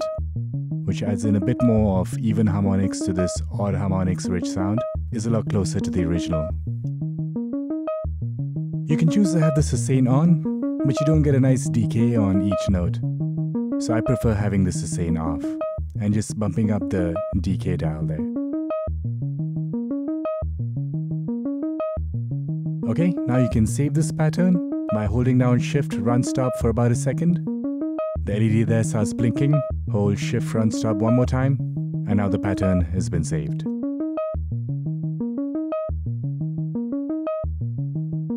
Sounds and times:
Synthesizer: 0.0s - 38.3s.

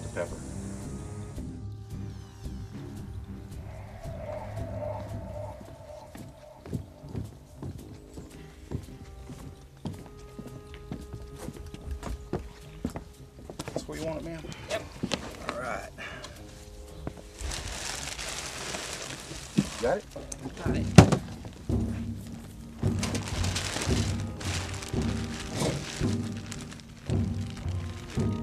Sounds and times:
Crackle: 2.1s - 7.8s, 17.2s - 28.4s.

